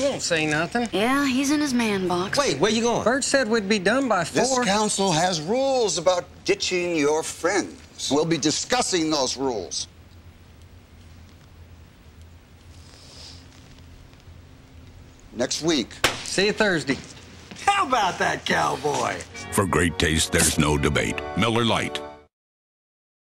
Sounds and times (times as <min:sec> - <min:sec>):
Speech: 0:17.6 - 0:22.0
Music: 0:18.8 - 0:22.3.